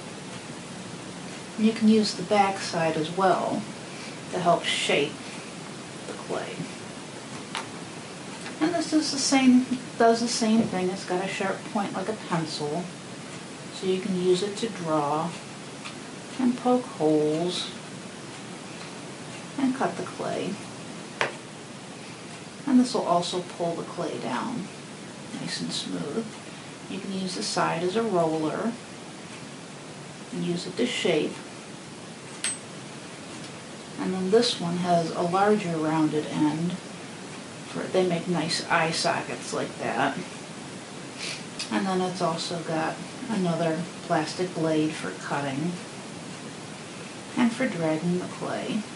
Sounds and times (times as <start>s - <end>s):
Speech: 1.6s - 3.7s, 4.3s - 5.2s, 6.1s - 6.8s, 8.6s - 12.9s, 13.7s - 15.4s, 16.4s - 17.8s, 19.6s - 20.6s, 22.7s - 24.7s, 25.3s - 26.3s, 26.9s - 28.8s, 30.3s - 31.4s, 34.0s - 36.8s, 37.7s - 40.3s, 41.6s - 45.8s, 47.3s - 48.9s.